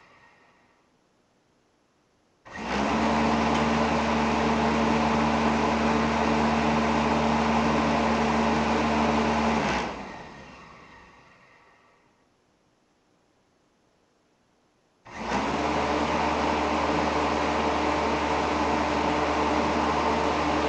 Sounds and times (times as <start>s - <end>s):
Inside, small room: 0.0s - 20.6s
Mechanical fan: 2.4s - 12.3s, 15.0s - 20.6s.